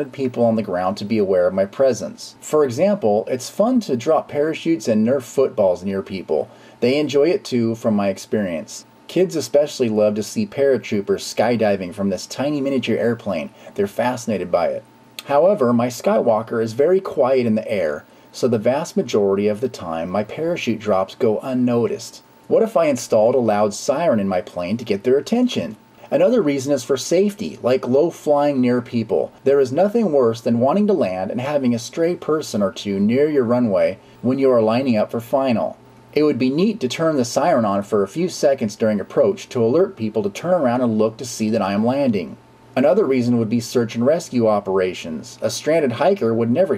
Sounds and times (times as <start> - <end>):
Speech: 0.0 - 46.7.